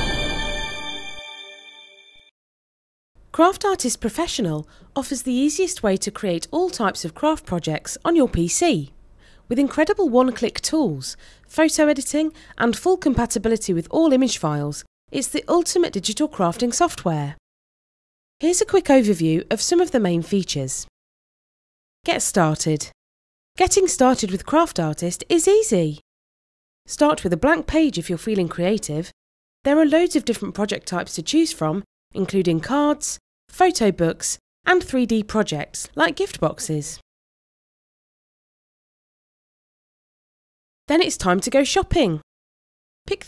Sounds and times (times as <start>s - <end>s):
Speech: 3.3s - 17.4s, 18.4s - 20.9s, 22.1s - 23.0s, 23.6s - 26.0s, 26.9s - 37.0s, 40.9s - 42.2s.